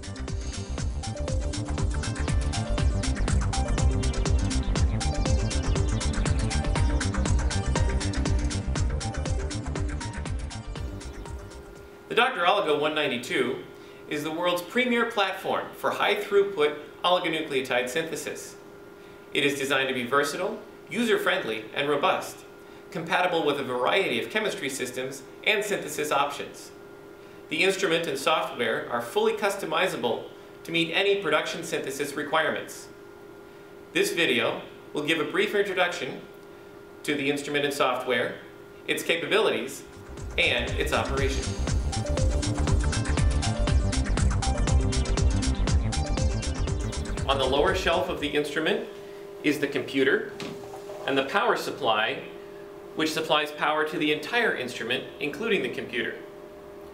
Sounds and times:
Speech: 12.1 - 18.6, 19.4 - 26.8, 27.5 - 33.0, 34.0 - 36.3, 37.0 - 41.6, 47.3 - 50.4, 51.0 - 52.4, 53.0 - 56.3.

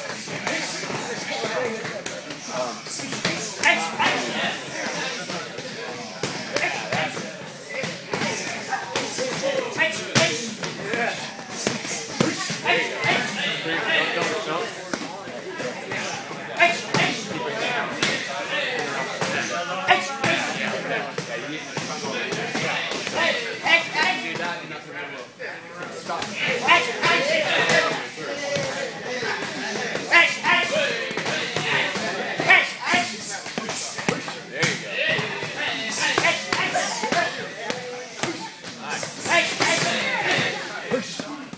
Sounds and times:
Speech: 0.0 - 41.5.

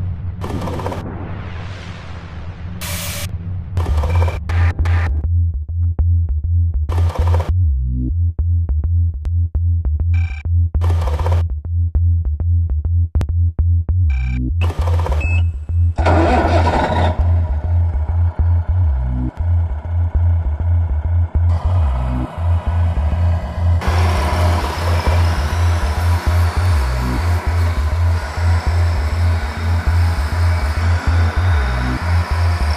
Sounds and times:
Truck: 0.0 - 1.8, 2.8 - 5.2, 6.9 - 7.6, 14.1 - 32.7
Music: 2.8 - 32.7.

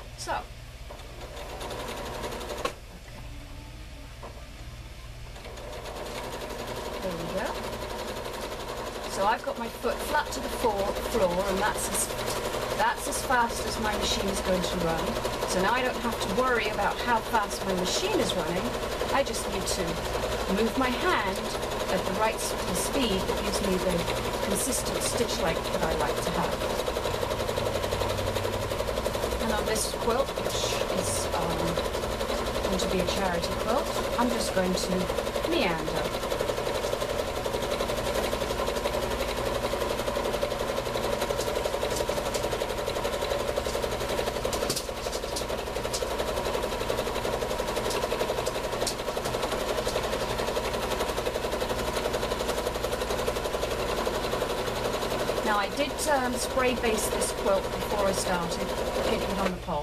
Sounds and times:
Speech: 0.2 - 0.5, 7.0 - 7.6, 9.1 - 26.6, 29.4 - 31.8, 32.7 - 36.2, 55.4 - 59.8
Sewing machine: 0.9 - 2.8, 5.3 - 59.8.

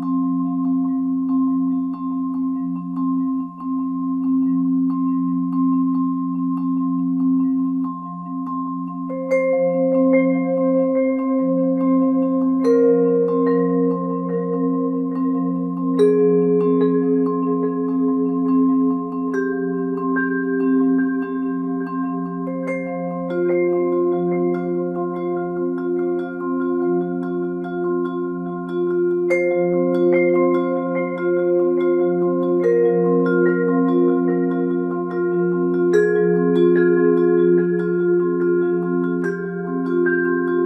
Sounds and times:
Vibraphone: 0.0 - 40.6.

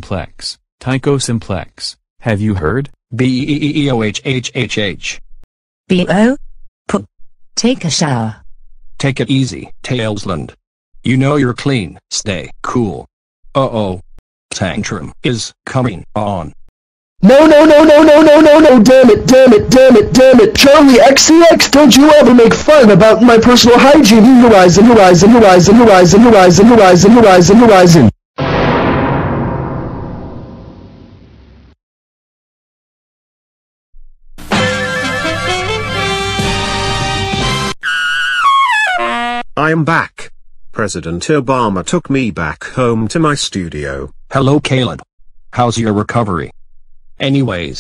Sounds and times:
Speech: 0.0 - 5.2, 9.0 - 16.6, 17.2 - 28.2, 39.6 - 46.5, 47.2 - 47.8
Music: 34.4 - 39.4.

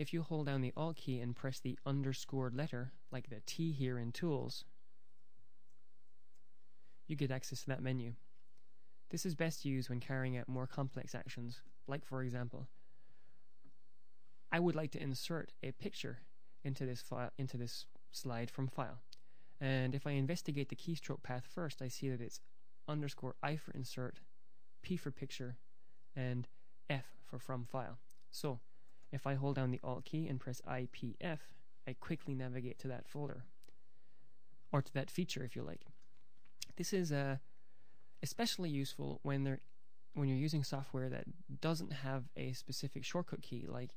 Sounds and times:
Speech: 0.0 - 4.8, 7.0 - 8.3, 9.1 - 12.8, 14.5 - 33.6, 34.7 - 36.0, 36.6 - 37.5, 38.2 - 43.9.

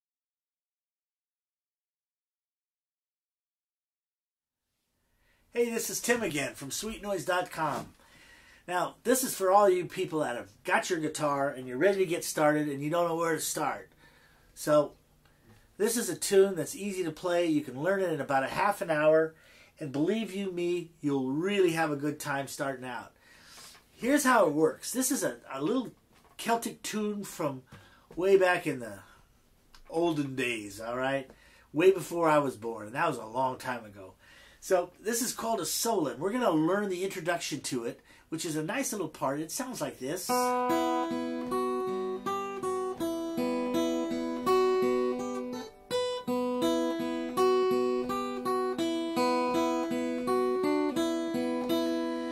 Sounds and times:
Speech: 5.5 - 7.9, 8.7 - 13.9, 14.6 - 15.0, 15.8 - 23.2, 24.0 - 29.1, 29.8 - 40.5.

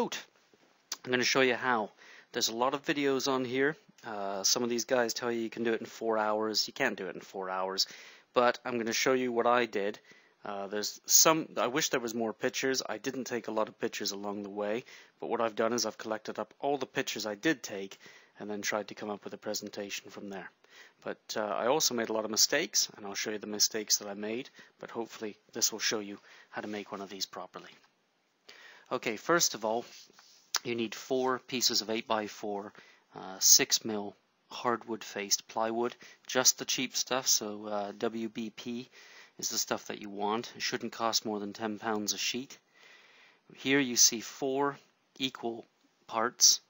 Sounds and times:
Speech: 0.0 - 27.9, 28.9 - 42.6, 43.6 - 46.7.

